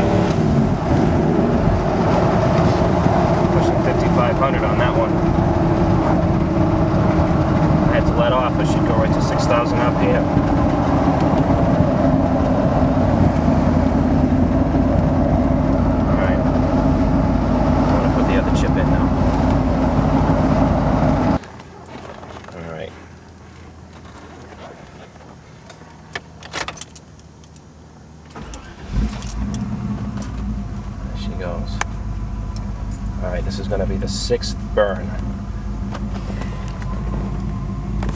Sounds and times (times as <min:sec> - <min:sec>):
Vehicle: 0:00.0 - 0:38.1
Speech: 0:03.6 - 0:05.1, 0:07.9 - 0:10.2, 0:16.1 - 0:16.4, 0:17.9 - 0:19.1, 0:22.5 - 0:23.0, 0:31.0 - 0:31.8, 0:33.2 - 0:35.2.